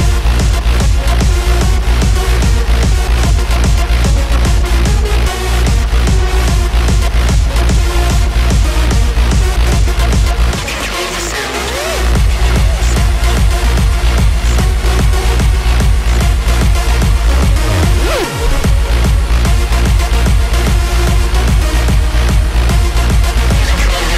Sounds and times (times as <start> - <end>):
Exciting music: 0.0 - 24.1.